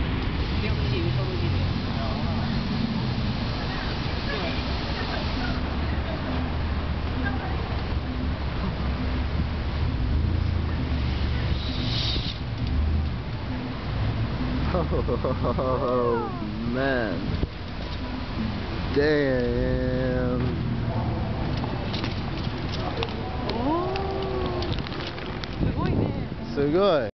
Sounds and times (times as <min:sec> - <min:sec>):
Bicycle: 0:10.4 - 0:13.2, 0:21.5 - 0:25.8.